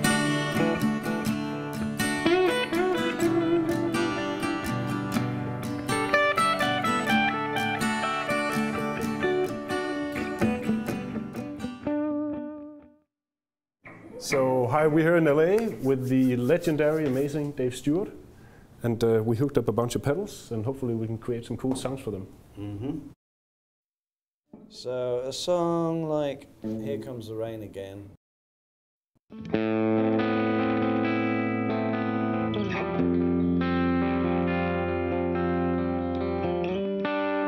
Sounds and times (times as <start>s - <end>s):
Music: 0.0s - 13.1s, 29.3s - 37.4s
Speech: 14.0s - 18.2s, 18.8s - 23.0s, 24.7s - 28.2s.